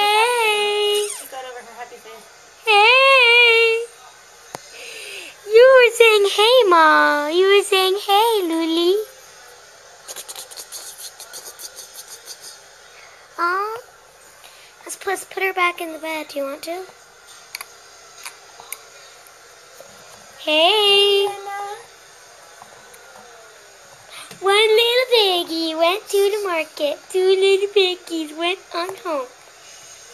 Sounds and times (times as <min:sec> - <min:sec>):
Child speech, kid speaking: 0:00.0 - 0:03.9, 0:05.5 - 0:09.1, 0:13.4 - 0:13.9, 0:14.8 - 0:17.0, 0:20.4 - 0:21.9, 0:24.2 - 0:29.4
Inside, small room: 0:00.0 - 0:30.1.